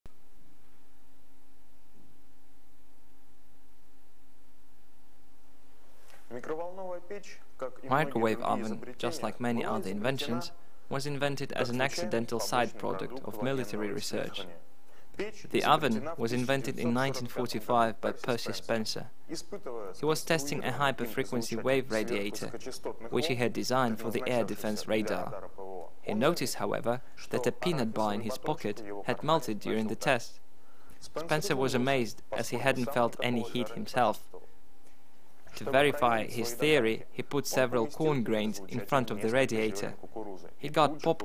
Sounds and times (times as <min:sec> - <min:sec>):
Speech: 0:06.3 - 0:14.6, 0:15.2 - 0:30.4, 0:31.0 - 0:34.5, 0:35.5 - 0:41.2.